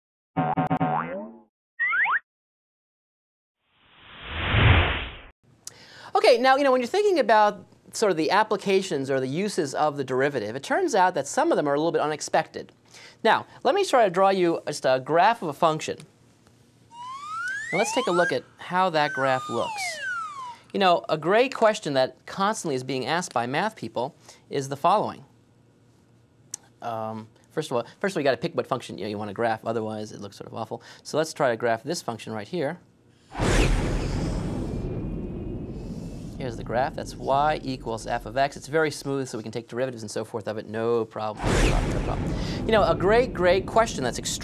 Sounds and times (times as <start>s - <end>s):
Speech: 6.1s - 16.1s, 17.8s - 20.0s, 20.7s - 25.3s, 26.8s - 32.8s, 36.4s - 44.4s.